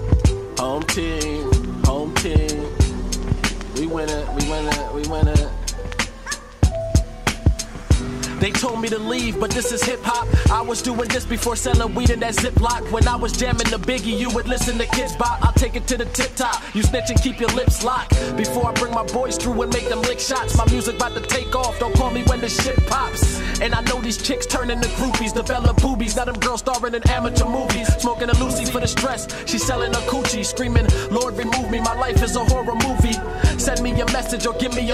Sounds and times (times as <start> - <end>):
Hip hop music: 0.0 - 34.9
Rapping: 0.6 - 3.0, 3.7 - 6.1, 8.2 - 34.9.